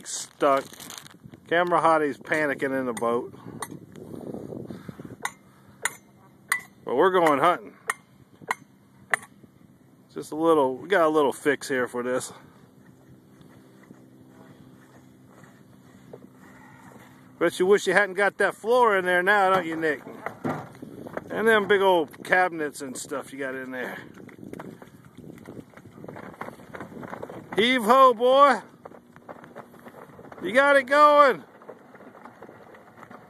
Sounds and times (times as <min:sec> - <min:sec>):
Speech: 0:00.0 - 0:00.7, 0:01.5 - 0:03.4, 0:06.9 - 0:07.7, 0:10.1 - 0:12.4, 0:17.4 - 0:20.2, 0:21.3 - 0:24.1, 0:27.6 - 0:28.7, 0:30.4 - 0:31.5.